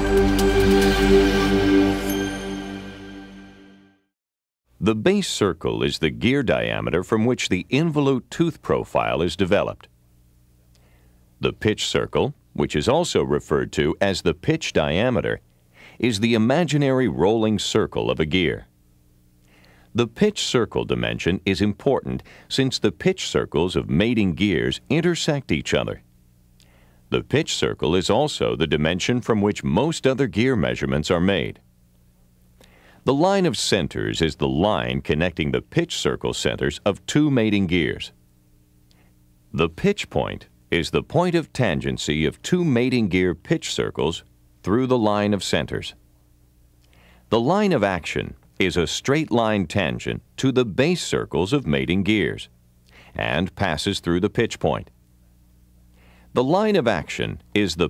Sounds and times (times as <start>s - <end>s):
Speech: 4.8s - 10.0s, 11.4s - 15.4s, 16.0s - 18.7s, 19.9s - 26.1s, 27.1s - 31.7s, 33.0s - 38.2s, 39.5s - 46.0s, 47.3s - 52.5s, 53.1s - 55.0s, 56.3s - 57.8s.